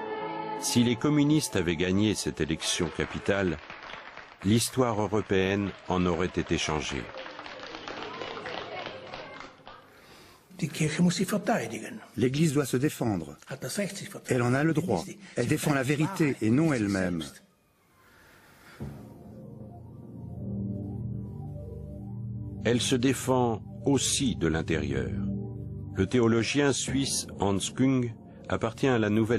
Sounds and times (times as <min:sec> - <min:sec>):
Music: 0:00.0 - 0:03.4, 0:17.1 - 0:29.3
Speech: 0:00.6 - 0:03.6, 0:04.4 - 0:07.1, 0:10.5 - 0:17.4, 0:22.7 - 0:25.3, 0:26.0 - 0:29.3.